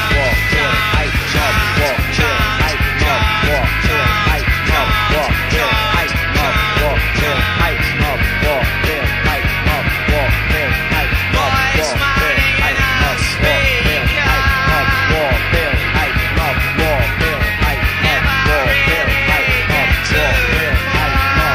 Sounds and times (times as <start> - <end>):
Music: 0.0 - 21.5.